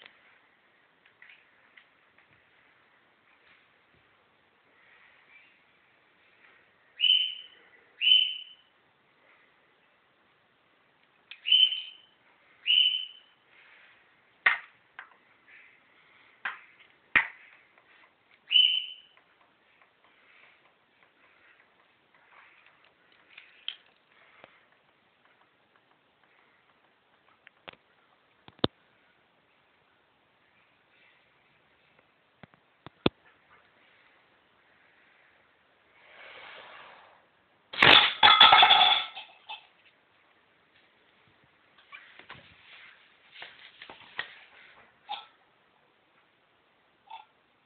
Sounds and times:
Inside, small room: 0:00.0 - 0:47.6.

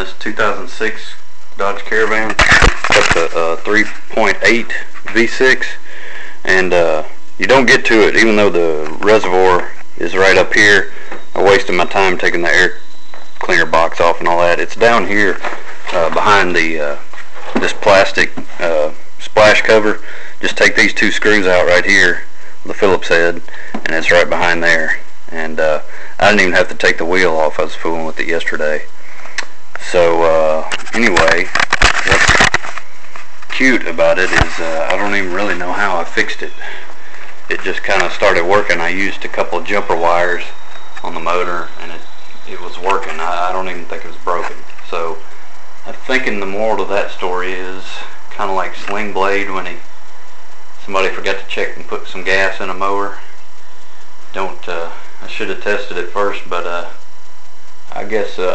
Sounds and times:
Speech: 0:00.0 - 0:12.8, 0:13.4 - 0:28.9, 0:29.8 - 0:32.6, 0:33.5 - 0:36.8, 0:37.5 - 0:49.8, 0:50.8 - 0:53.3, 0:54.3 - 0:57.0, 0:57.9 - 0:58.5.

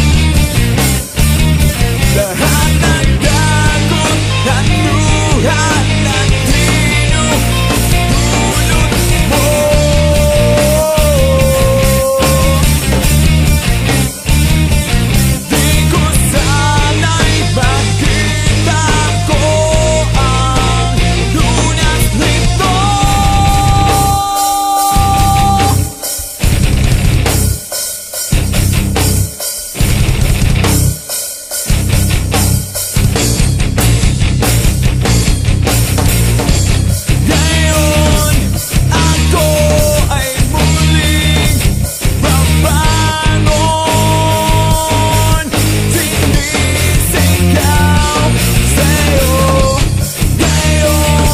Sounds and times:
Grunge: 0:00.0 - 0:51.3
Punk rock: 0:00.0 - 0:51.3.

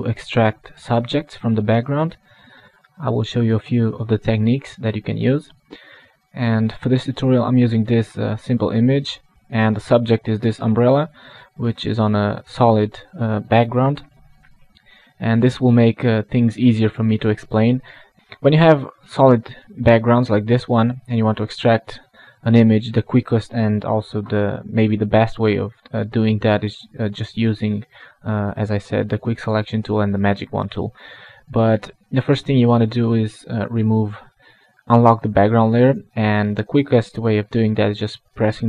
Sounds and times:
Speech: 0:00.0 - 0:02.2, 0:03.0 - 0:05.7, 0:06.3 - 0:14.1, 0:15.2 - 0:38.6.

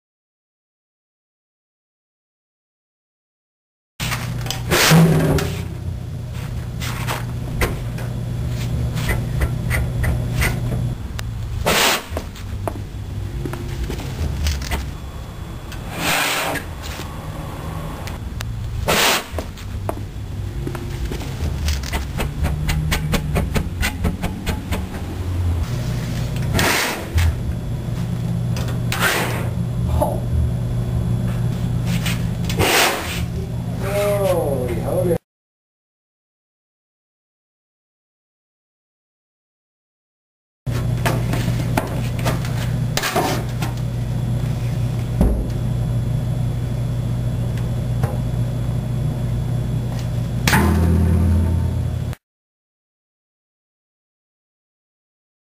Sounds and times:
Speech: 0:33.4 - 0:35.2.

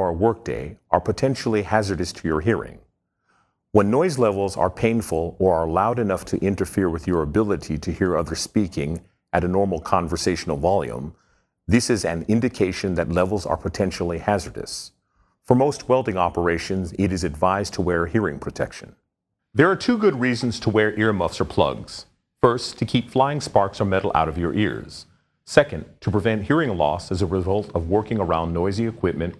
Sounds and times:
Speech: 0:00.0 - 0:02.9, 0:03.8 - 0:19.0, 0:19.6 - 0:29.3.

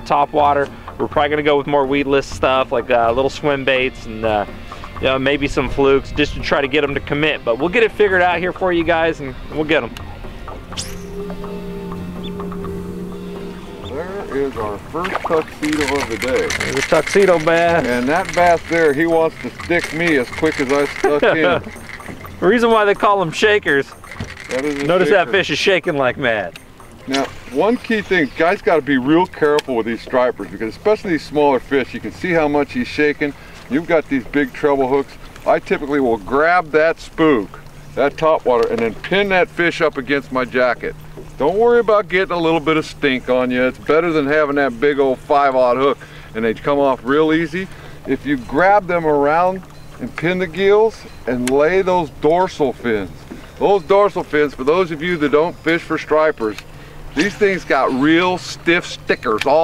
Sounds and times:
Speech: 0:00.0 - 0:10.0, 0:13.9 - 0:21.6, 0:22.4 - 0:23.9, 0:24.5 - 0:56.6, 0:57.2 - 0:59.6
Outside, rural or natural: 0:00.0 - 0:59.6.

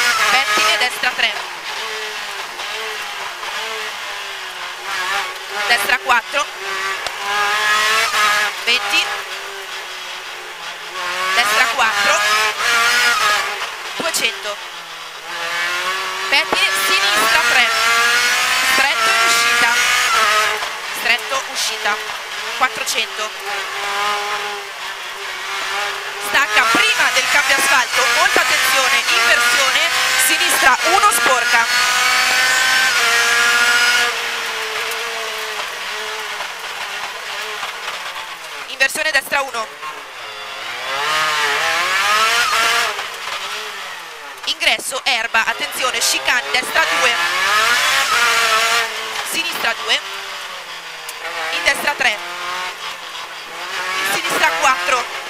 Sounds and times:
Car: 0:00.0 - 0:55.2
Speech: 0:00.3 - 0:01.4, 0:05.6 - 0:06.5, 0:08.6 - 0:09.1, 0:11.3 - 0:12.4, 0:14.0 - 0:14.6, 0:16.3 - 0:17.8, 0:18.7 - 0:19.8, 0:21.0 - 0:23.4, 0:26.2 - 0:31.7, 0:38.7 - 0:39.8, 0:44.5 - 0:47.3, 0:49.3 - 0:50.0, 0:51.5 - 0:52.2, 0:54.0 - 0:55.1.

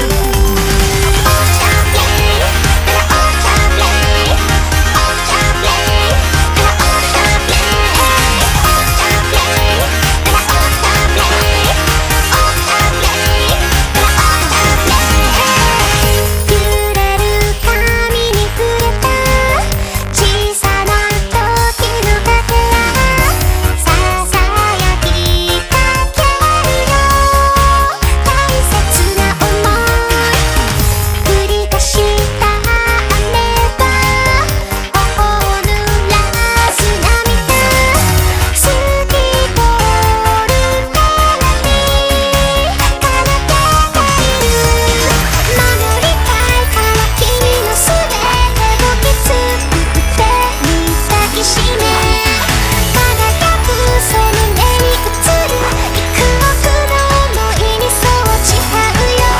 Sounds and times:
Music: 0:00.0 - 0:59.3.

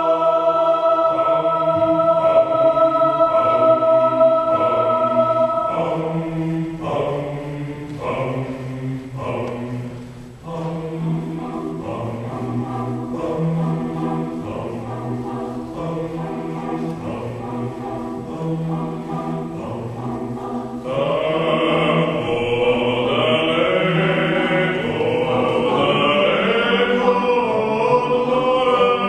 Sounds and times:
Choir: 0:00.0 - 0:29.0.

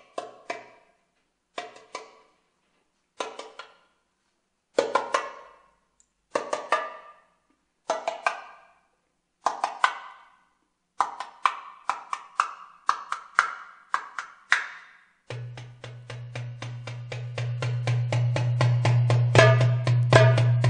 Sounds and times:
Percussion: 0:00.0 - 0:00.9, 0:01.5 - 0:02.4, 0:03.2 - 0:03.9, 0:04.7 - 0:20.7.

